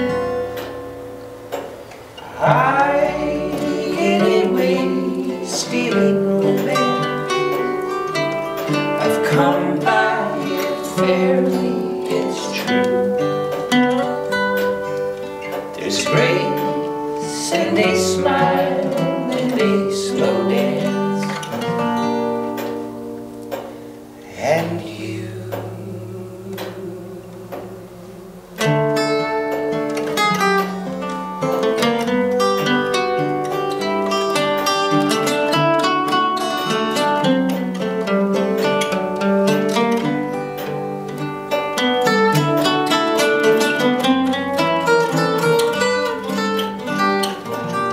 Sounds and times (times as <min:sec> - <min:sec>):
Music: 0:00.0 - 0:47.9
Singing: 0:02.2 - 0:07.8, 0:08.7 - 0:13.4, 0:15.8 - 0:21.8, 0:24.2 - 0:28.9.